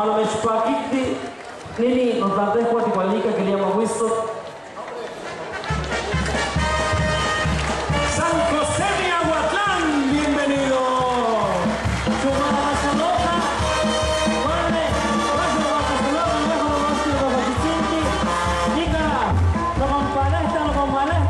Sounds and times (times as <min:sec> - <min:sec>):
Speech: 0:00.0 - 0:05.2, 0:08.1 - 0:13.7, 0:14.4 - 0:21.2
Music: 0:05.2 - 0:21.2.